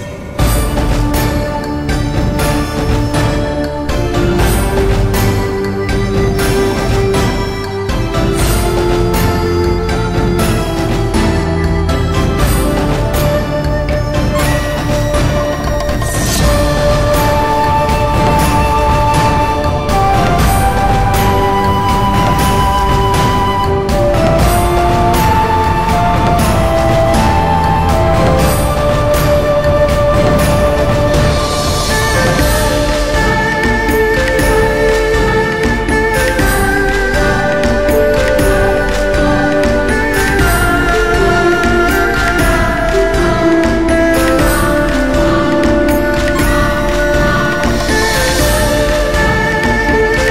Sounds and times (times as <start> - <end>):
Background music: 0.0 - 50.3
Theme music: 0.0 - 50.3.